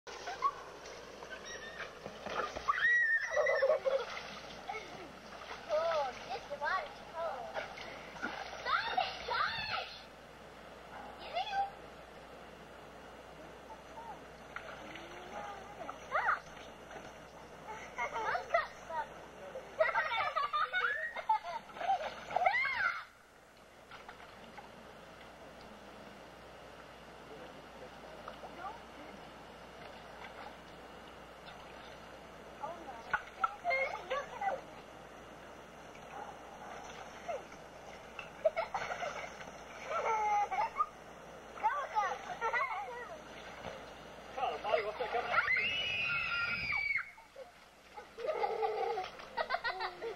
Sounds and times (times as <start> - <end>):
Outside, rural or natural: 0.0 - 50.1.